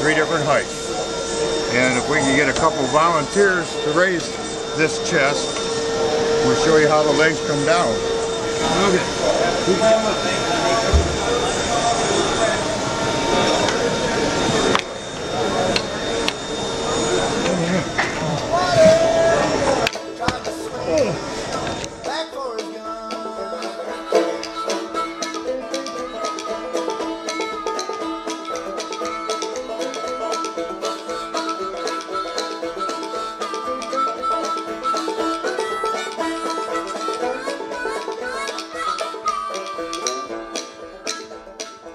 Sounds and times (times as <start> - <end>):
Music: 19.8 - 41.9.